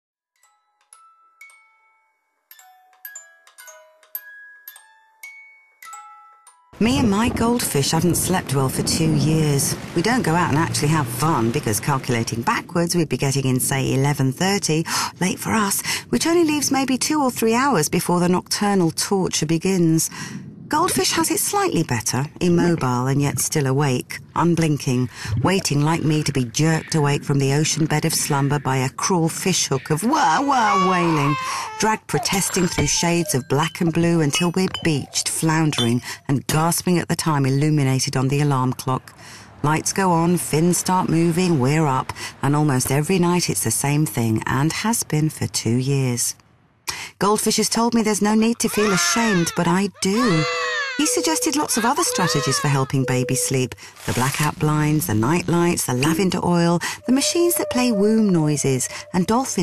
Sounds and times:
Glockenspiel: 0:00.4 - 0:06.8, 0:51.0 - 0:53.8
Marimba, xylophone: 0:00.4 - 0:06.8, 0:51.0 - 0:53.7.

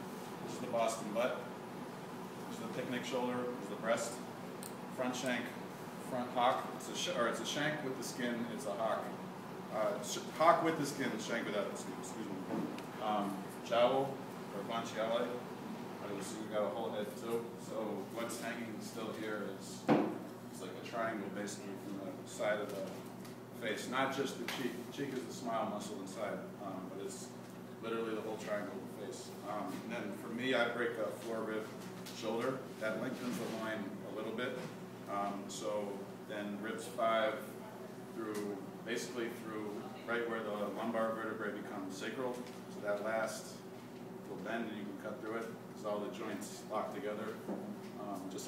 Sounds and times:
Speech: 0:00.4 - 0:01.6, 0:02.5 - 0:04.3, 0:04.9 - 0:19.9, 0:20.5 - 0:43.7, 0:44.3 - 0:48.4.

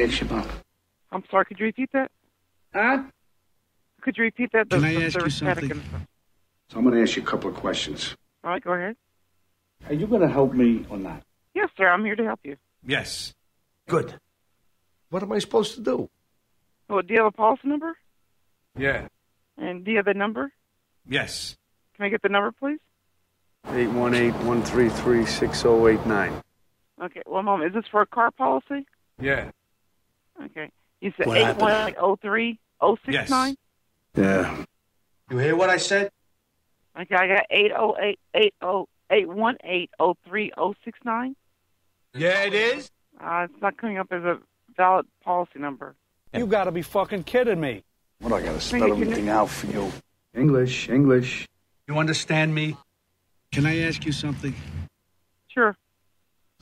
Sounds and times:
Speech: 0:00.0 - 0:00.6, 0:04.0 - 0:06.0, 0:06.7 - 0:09.0, 0:09.8 - 0:14.2, 0:18.8 - 0:20.5, 0:21.1 - 0:22.8, 0:23.7 - 0:26.4, 0:27.0 - 0:29.5, 0:30.4 - 0:33.6, 0:34.2 - 0:34.7, 0:35.3 - 0:36.1, 0:42.2 - 0:52.8, 0:53.6 - 0:54.6.

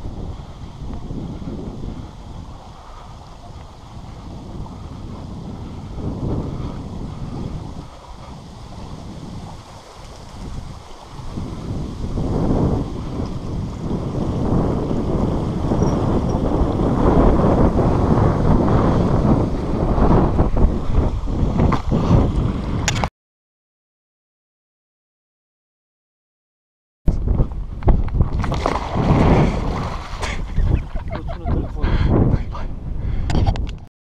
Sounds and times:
Speech: 0:31.1 - 0:32.7.

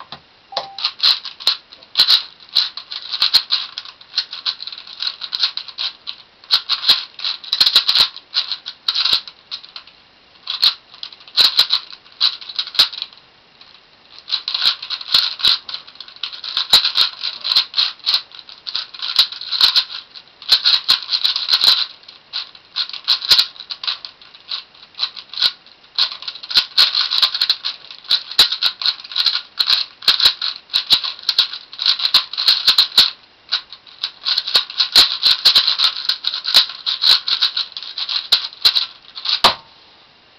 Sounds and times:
Inside, small room: 0:00.0 - 0:40.3.

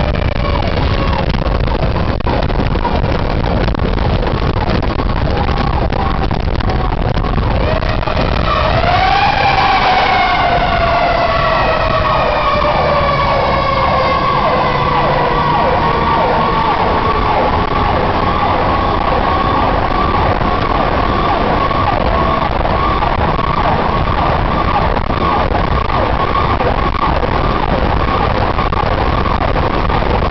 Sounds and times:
Ambulance (siren): 0:00.0 - 0:30.3.

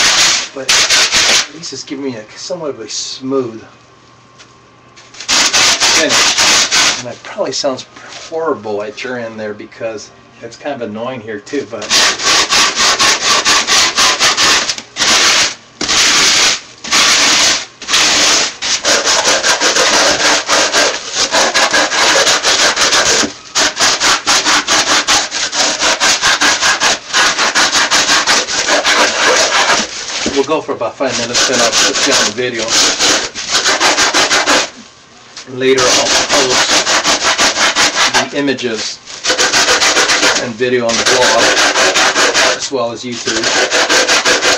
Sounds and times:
Rub: 0:00.0 - 0:01.5, 0:05.2 - 0:07.1, 0:11.8 - 0:34.8, 0:35.7 - 0:44.5
Sanding: 0:00.0 - 0:01.5, 0:05.3 - 0:07.0, 0:11.8 - 0:34.8, 0:35.7 - 0:44.5.

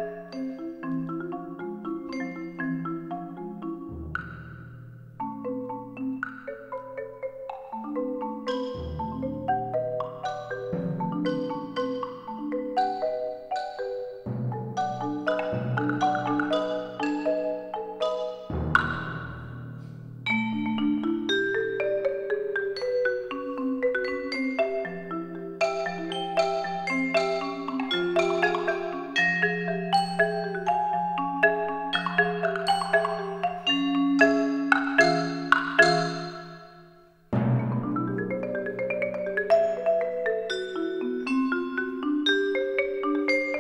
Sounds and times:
Wood block: 0:00.0 - 0:43.6.

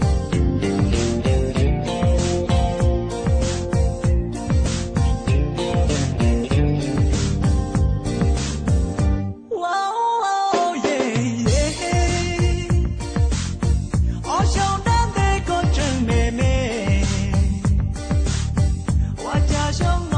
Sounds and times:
Rhythm and blues: 0:00.0 - 0:09.5, 0:10.4 - 0:20.1
Pop music: 0:00.0 - 0:20.1.

